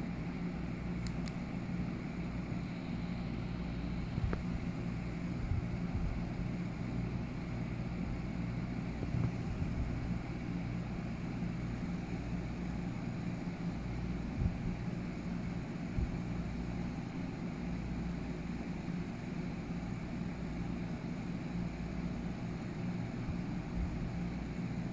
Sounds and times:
Inside, small room: 0.0 - 24.9.

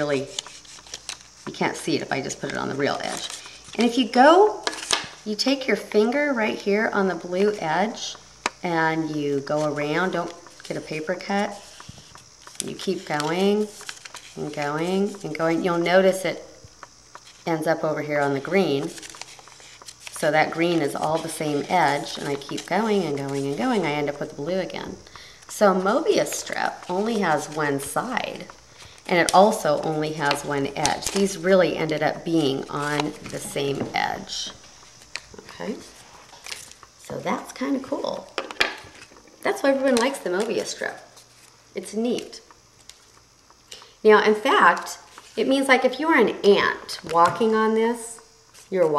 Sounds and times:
Speech: 0.0 - 0.3, 1.5 - 4.6, 5.3 - 11.6, 12.6 - 13.7, 14.4 - 16.4, 17.5 - 19.0, 20.2 - 28.5, 29.1 - 34.6, 35.4 - 35.8, 37.1 - 38.3, 39.4 - 41.1, 41.8 - 42.4, 44.0 - 48.9
Inside, small room: 0.0 - 48.9.

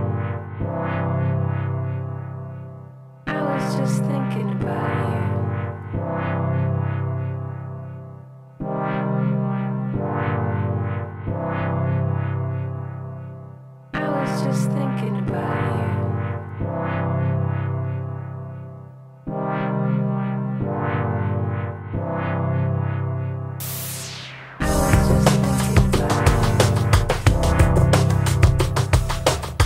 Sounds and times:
Music: 0.0 - 29.6
Speech: 3.3 - 5.4, 14.0 - 16.1.

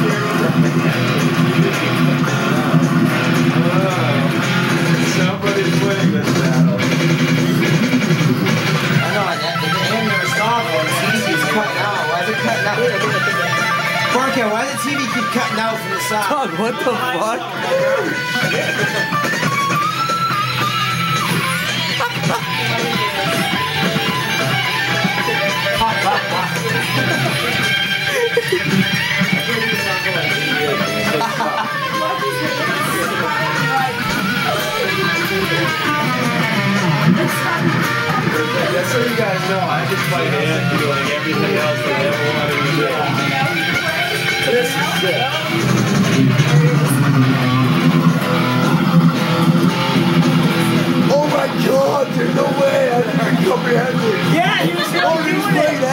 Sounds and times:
Electric guitar: 0.0 - 55.9
Speech: 3.5 - 6.9, 9.0 - 19.0, 25.1 - 45.6, 51.0 - 55.9.

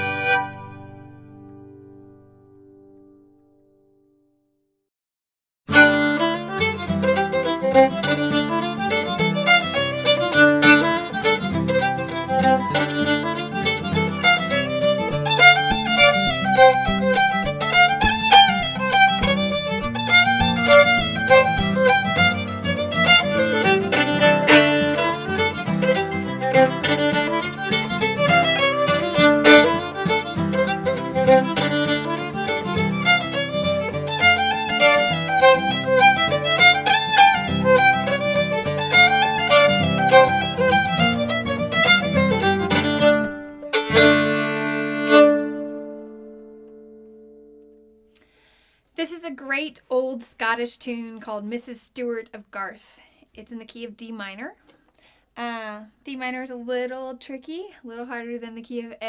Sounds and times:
Violin, fiddle: 0.0 - 1.2, 5.7 - 46.7.

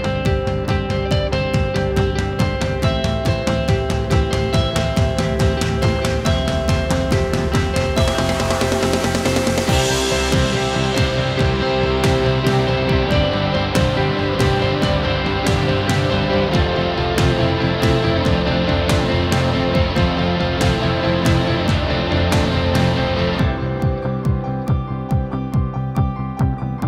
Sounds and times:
Music: 0.0 - 26.8.

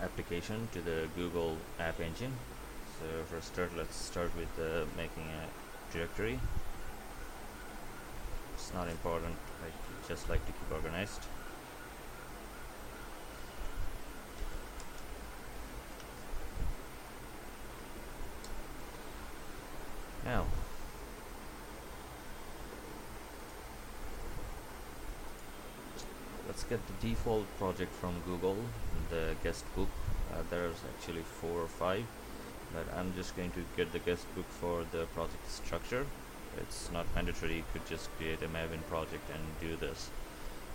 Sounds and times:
Speech: 0.0 - 6.5, 8.6 - 11.3, 20.2 - 20.6, 26.5 - 32.1, 32.7 - 40.2.

